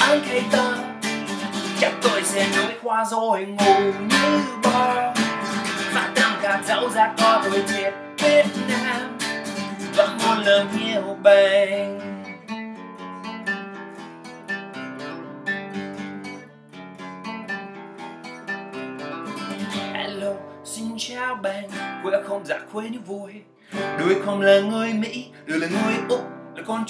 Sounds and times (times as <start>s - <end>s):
Music: 0.0s - 26.9s.